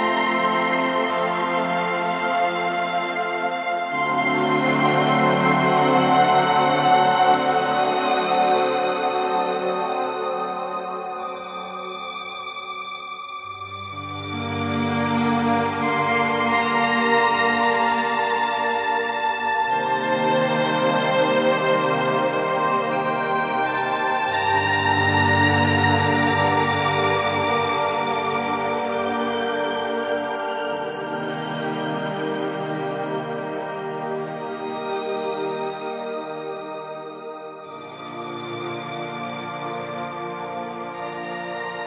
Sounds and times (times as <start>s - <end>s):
Music: 0.0s - 41.8s.